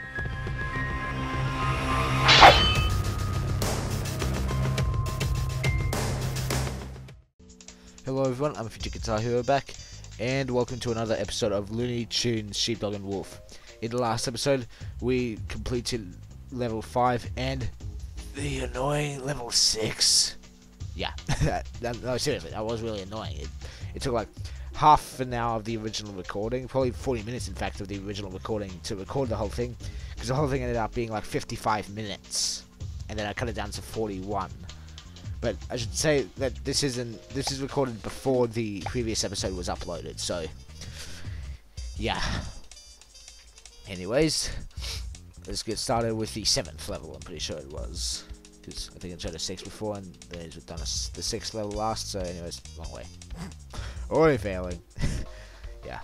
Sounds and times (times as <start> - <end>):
Music: 0.0 - 56.0
Speech: 8.0 - 17.7, 18.3 - 20.4, 21.0 - 34.6, 35.4 - 40.5, 42.0 - 42.5, 43.9 - 44.6, 45.4 - 53.5, 54.1 - 54.8, 55.8 - 56.0.